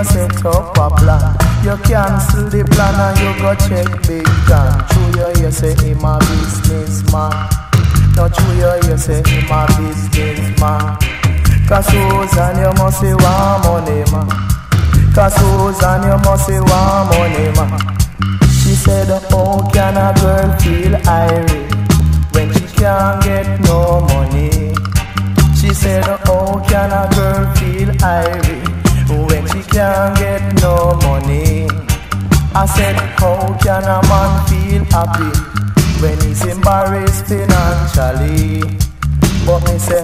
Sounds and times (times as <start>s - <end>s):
Music: 0.0s - 40.0s.